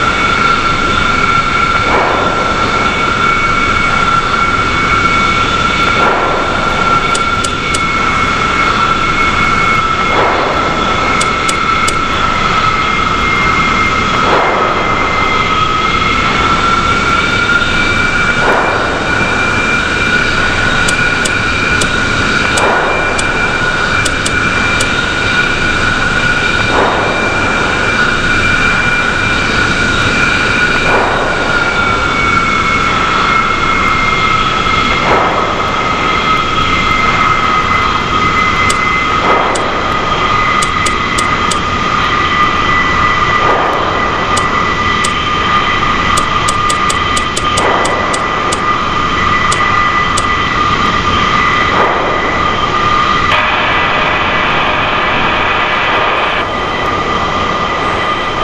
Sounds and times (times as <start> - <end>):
Aircraft: 0.0 - 58.4.